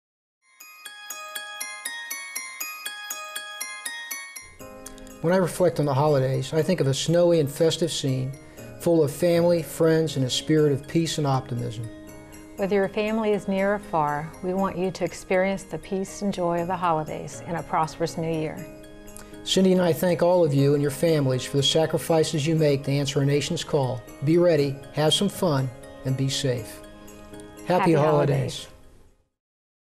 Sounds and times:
Music: 0.4s - 29.3s
Speech: 27.7s - 28.7s.

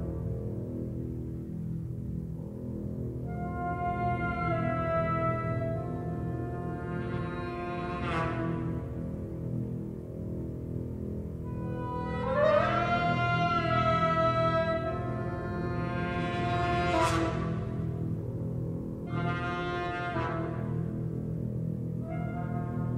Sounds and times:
Scary music: 0.0s - 22.9s.

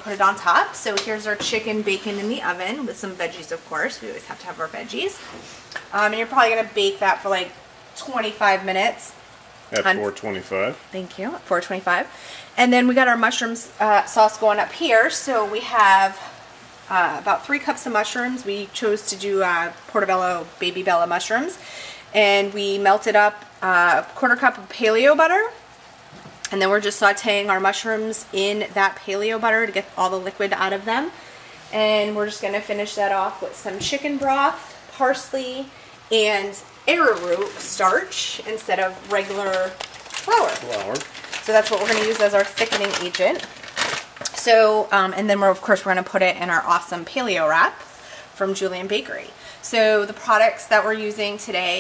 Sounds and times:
Speech: 0.0s - 5.2s, 5.9s - 9.2s, 9.8s - 16.3s, 16.9s - 21.6s, 22.2s - 25.6s, 26.5s - 43.5s, 44.3s - 47.8s, 48.4s - 51.8s.

